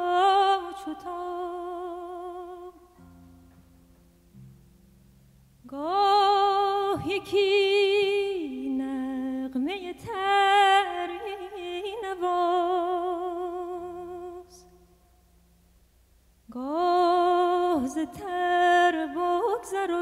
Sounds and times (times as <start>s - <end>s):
Music: 0.0s - 15.8s.